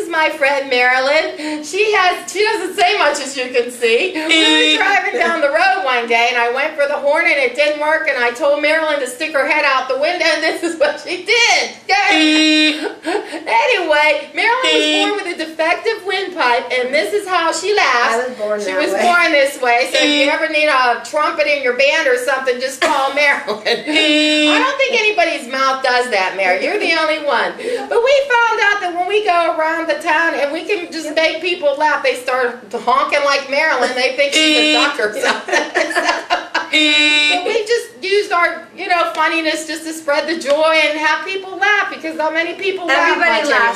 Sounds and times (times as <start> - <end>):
Speech: 0.0 - 43.7.